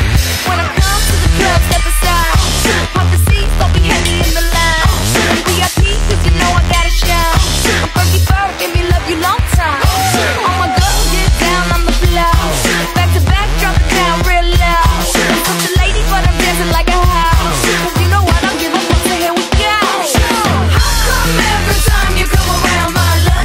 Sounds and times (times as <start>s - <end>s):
Bass drum: 0.0s - 23.4s
Drum kit: 0.0s - 23.4s
Drum roll: 0.0s - 23.4s.